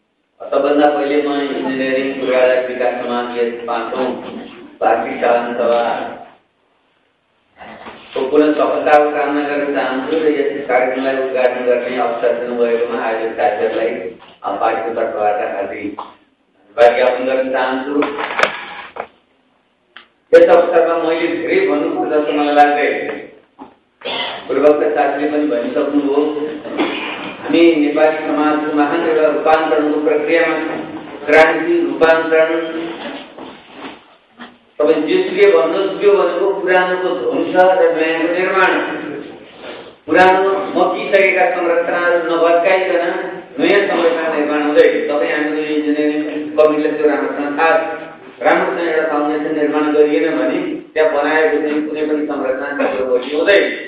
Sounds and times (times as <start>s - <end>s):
Narration, monologue: 0.0s - 53.8s
Male speech, man speaking: 0.4s - 6.2s, 7.6s - 16.0s, 16.7s - 18.4s, 20.3s - 23.3s, 24.5s - 26.8s, 27.4s - 33.0s, 34.8s - 39.4s, 40.1s - 53.8s.